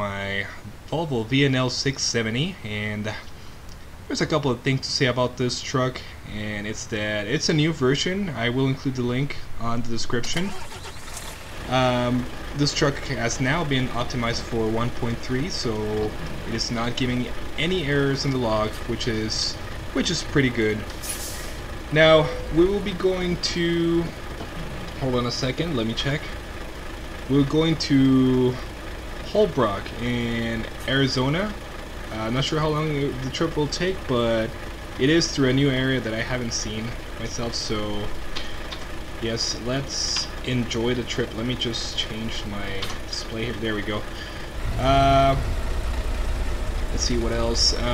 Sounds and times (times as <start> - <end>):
Speech: 0.0 - 3.3, 4.1 - 10.7, 11.7 - 20.9, 21.9 - 24.2, 25.0 - 26.4, 27.3 - 28.7, 29.3 - 38.1, 39.2 - 45.6, 46.9 - 47.9
Truck: 0.0 - 47.9.